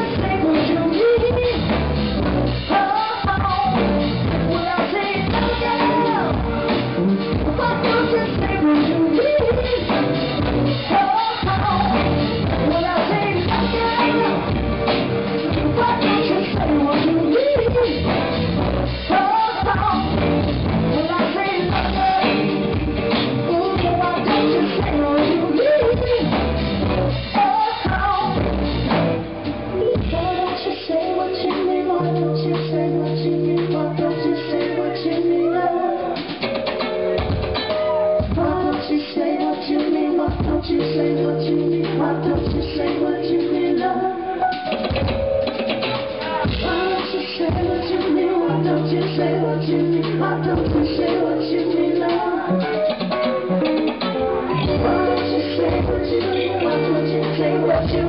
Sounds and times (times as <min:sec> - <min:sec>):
Music: 0:00.0 - 0:58.0
Singing: 0:29.8 - 0:36.4, 0:38.3 - 0:44.6, 0:46.1 - 0:52.8, 0:54.5 - 0:58.0.